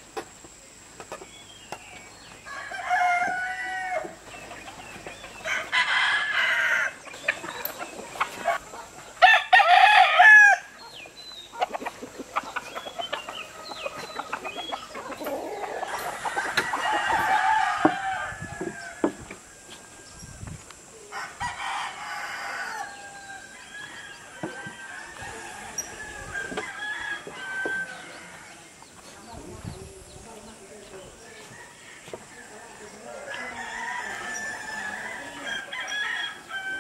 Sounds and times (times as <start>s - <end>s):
Crowing, cock-a-doodle-doo: 2.5s - 4.2s, 5.5s - 7.0s, 9.2s - 10.7s, 15.8s - 20.1s, 21.1s - 28.6s, 31.4s - 36.8s
Cluck: 10.8s - 16.8s.